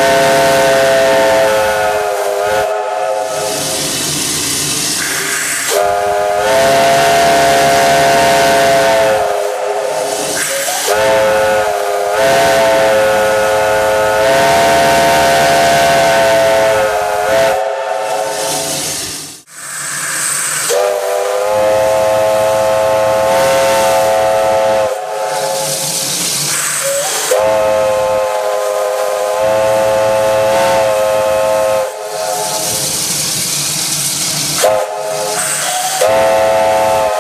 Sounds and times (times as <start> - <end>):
Hiss: 0.0 - 37.2
Railroad car, train wagon: 0.0 - 37.2
Steam whistle: 0.0 - 37.2
Train whistle: 0.0 - 37.2.